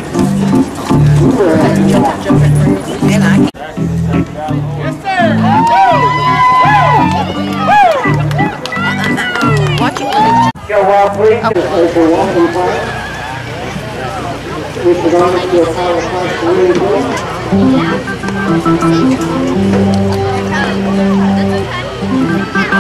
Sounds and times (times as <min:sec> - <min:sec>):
Music: 0:00.0 - 0:13.5, 0:16.7 - 0:22.8.